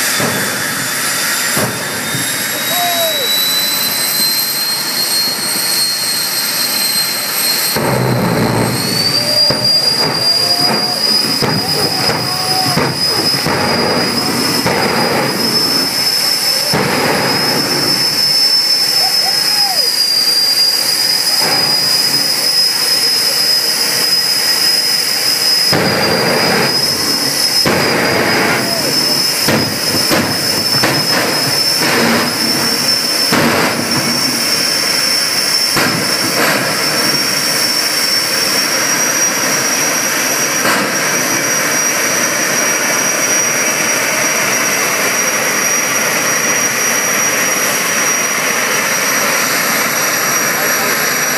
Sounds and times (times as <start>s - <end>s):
Car: 0.0s - 51.3s
Speech: 9.2s - 13.0s, 18.3s - 21.4s, 22.2s - 24.2s, 50.3s - 51.3s.